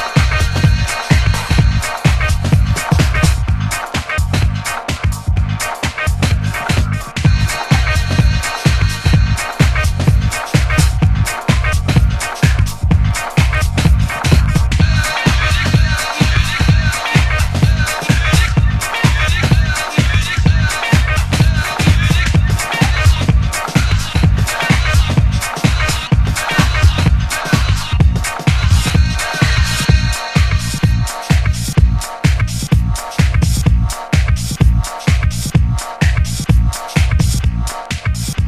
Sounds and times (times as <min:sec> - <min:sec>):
House music: 0:00.0 - 0:38.4.